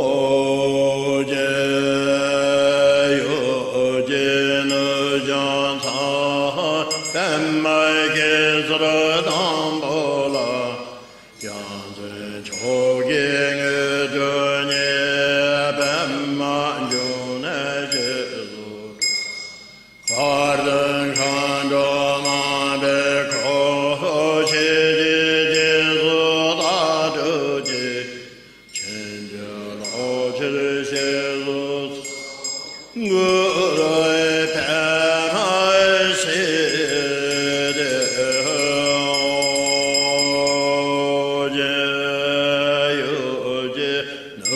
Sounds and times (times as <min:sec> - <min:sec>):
Mantra: 0:00.0 - 0:19.2, 0:20.1 - 0:44.5.